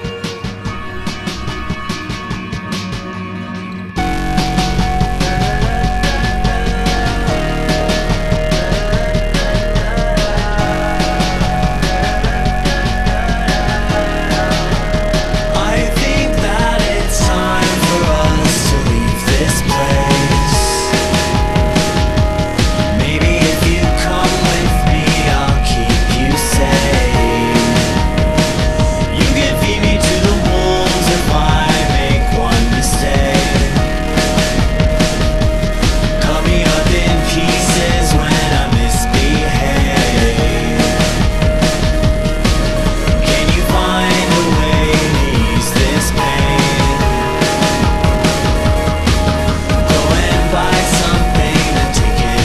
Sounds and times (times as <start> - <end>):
Music: 0.0 - 52.4.